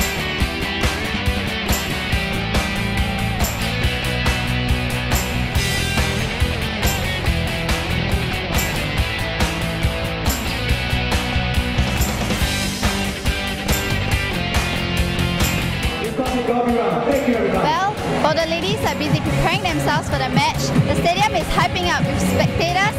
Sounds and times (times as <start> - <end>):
Music: 0.0 - 22.9.